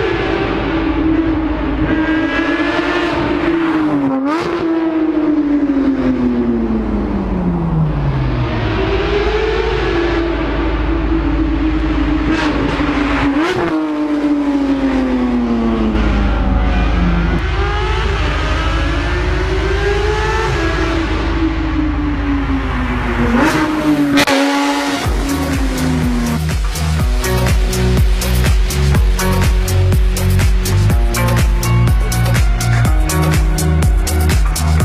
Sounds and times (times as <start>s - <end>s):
Soundtrack music: 15.4s - 34.8s
Rhythm and blues: 24.2s - 34.8s.